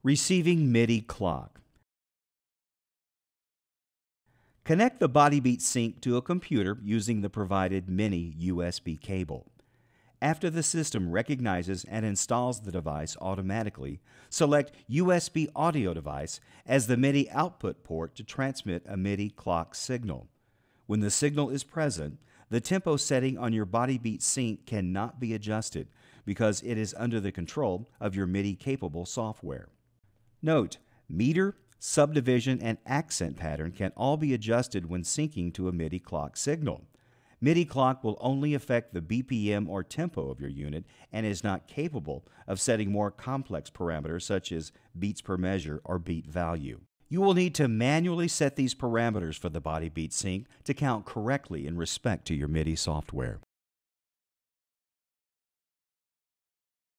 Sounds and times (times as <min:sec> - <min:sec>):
Speech: 0:00.0 - 0:01.7, 0:04.7 - 0:09.5, 0:10.2 - 0:20.3, 0:20.9 - 0:29.8, 0:30.4 - 0:53.5.